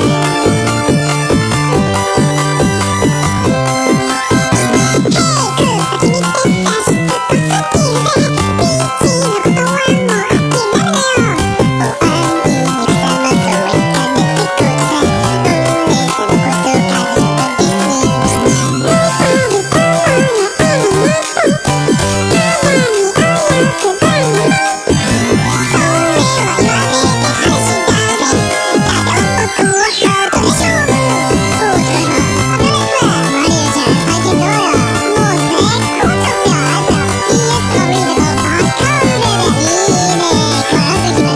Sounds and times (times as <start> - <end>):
Music: 0.0 - 41.3.